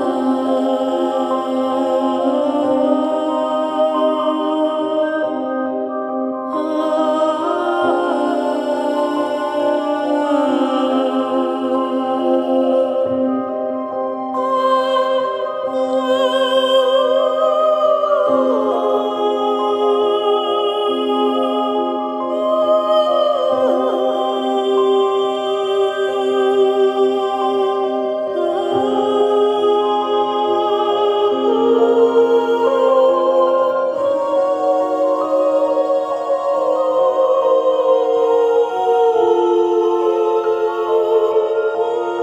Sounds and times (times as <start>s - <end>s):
Music: 0.0s - 42.2s.